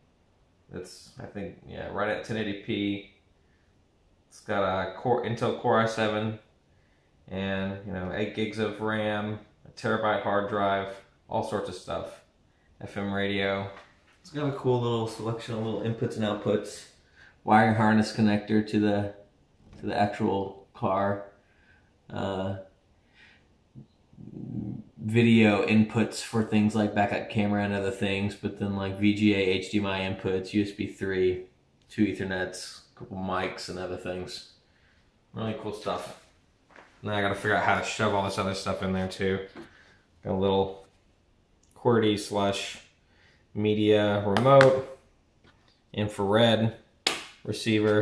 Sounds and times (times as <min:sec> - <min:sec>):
Speech: 0:00.7 - 0:03.2, 0:04.3 - 0:06.5, 0:07.3 - 0:21.4, 0:22.1 - 0:22.7, 0:24.2 - 0:34.6, 0:35.3 - 0:36.3, 0:37.0 - 0:39.6, 0:40.2 - 0:40.9, 0:41.7 - 0:42.9, 0:43.6 - 0:45.0, 0:45.9 - 0:46.9, 0:47.5 - 0:48.0.